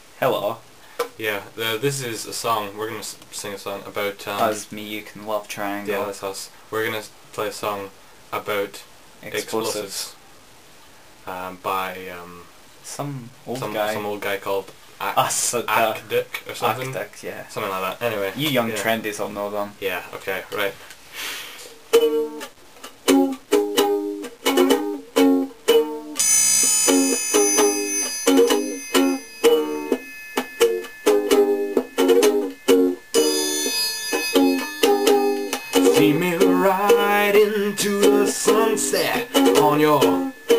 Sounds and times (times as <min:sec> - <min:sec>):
Inside, small room: 0:00.0 - 0:40.5
Ukulele: 0:21.9 - 0:40.5.